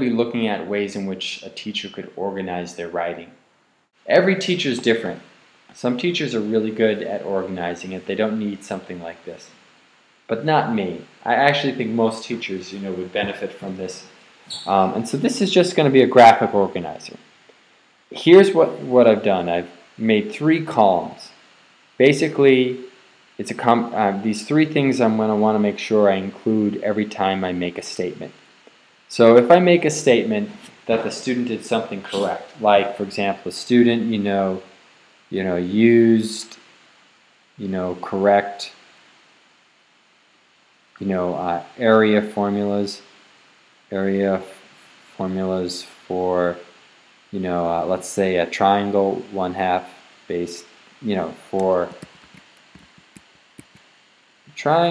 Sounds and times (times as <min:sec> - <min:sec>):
Speech: 0:00.0 - 0:03.4, 0:04.1 - 0:09.6, 0:10.3 - 0:17.2, 0:18.1 - 0:21.4, 0:22.0 - 0:28.4, 0:29.1 - 0:34.7, 0:35.3 - 0:36.6, 0:37.6 - 0:38.8, 0:41.0 - 0:43.1, 0:43.9 - 0:46.7, 0:47.3 - 0:52.1, 0:54.5 - 0:54.9.